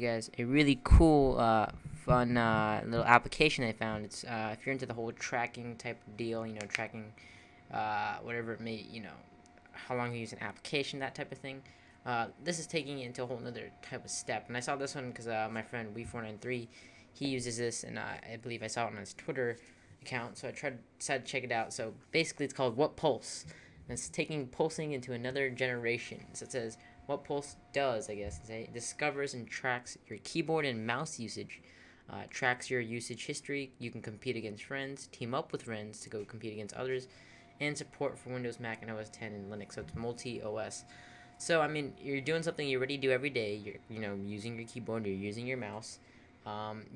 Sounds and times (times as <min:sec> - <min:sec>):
Speech: 0:00.0 - 0:46.9.